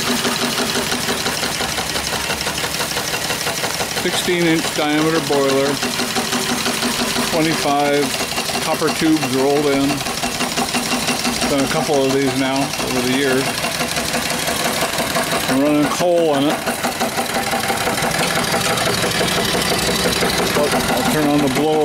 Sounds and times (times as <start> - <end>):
Engine: 0.0 - 21.8
Speech: 4.0 - 5.8, 7.3 - 10.0, 11.4 - 13.5, 15.5 - 16.6, 20.6 - 21.8.